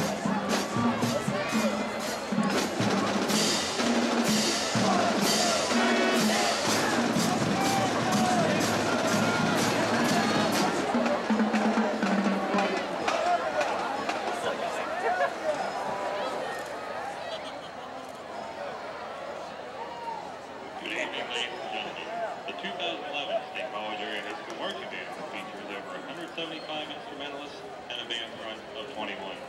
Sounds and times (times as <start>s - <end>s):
Music: 0.0s - 14.5s.